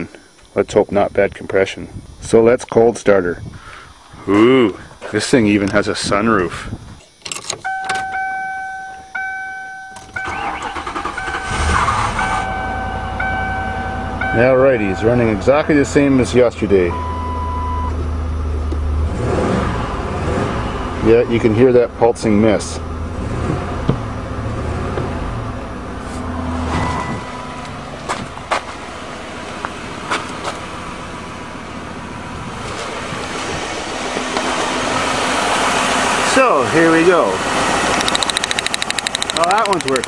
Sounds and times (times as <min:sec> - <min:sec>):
Car: 0:04.3 - 0:40.0.